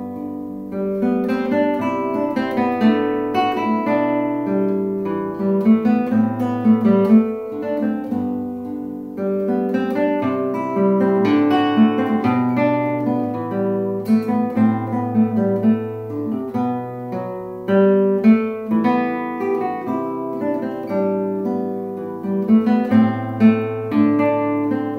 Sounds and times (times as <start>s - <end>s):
Music: 0.0s - 24.9s.